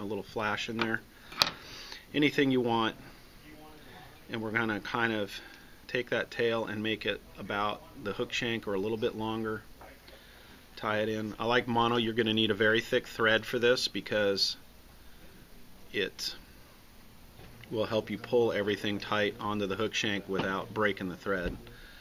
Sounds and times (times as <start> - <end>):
Speech: 2.1 - 10.1, 10.8 - 14.6, 15.9 - 16.4, 17.7 - 21.8.